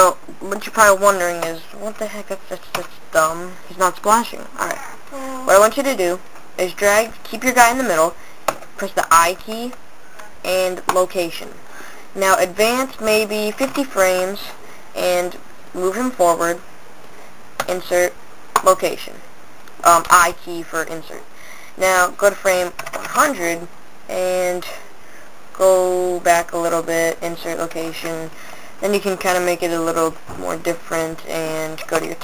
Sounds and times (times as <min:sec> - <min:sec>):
Speech: 0:00.0 - 0:08.2, 0:08.8 - 0:09.8, 0:12.2 - 0:16.6, 0:17.6 - 0:19.2, 0:19.8 - 0:24.8, 0:25.6 - 0:32.2.